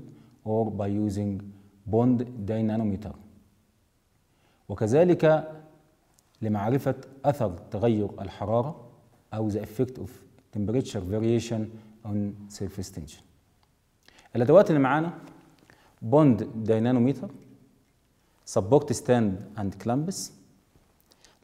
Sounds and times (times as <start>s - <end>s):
Speech: 0.0s - 3.3s, 4.7s - 5.6s, 6.4s - 13.3s, 14.3s - 15.2s, 16.0s - 17.4s, 18.5s - 20.4s.